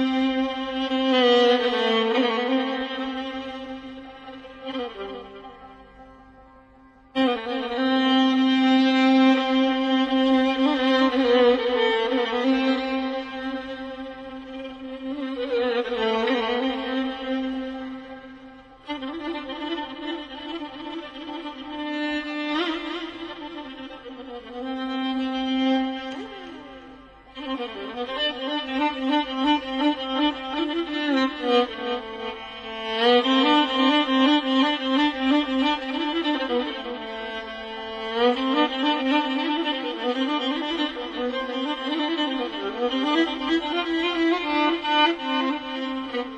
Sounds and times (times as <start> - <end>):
Violin, fiddle: 0.0 - 46.3.